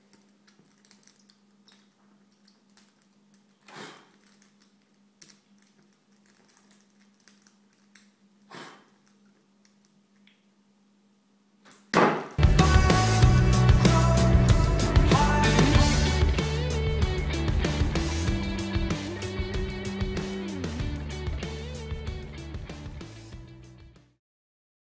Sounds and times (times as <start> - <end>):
Background music: 12.4 - 24.2.